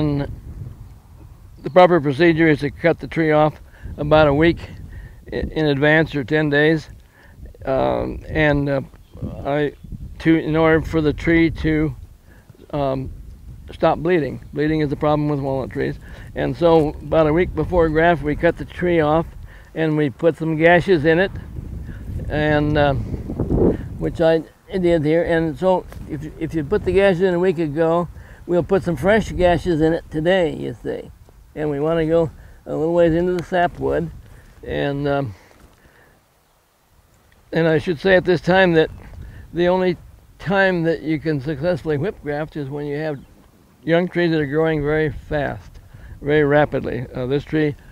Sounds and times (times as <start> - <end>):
Speech: 0.0 - 0.3, 1.6 - 6.9, 7.5 - 12.0, 12.7 - 13.1, 13.7 - 21.4, 22.2 - 23.1, 24.0 - 35.4, 37.5 - 47.8.